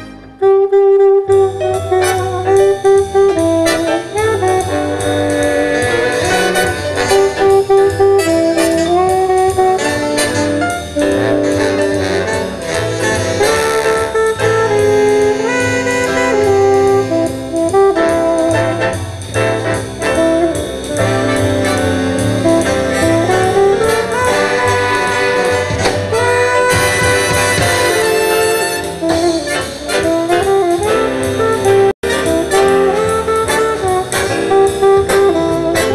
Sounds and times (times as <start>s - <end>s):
Music: 0.0s - 35.9s.